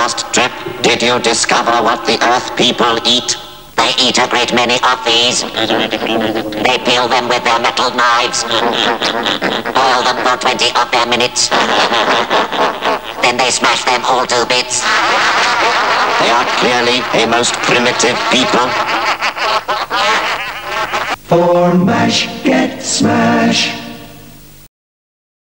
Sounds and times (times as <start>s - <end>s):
Speech: 0.0s - 8.8s, 9.7s - 11.7s, 13.2s - 18.9s.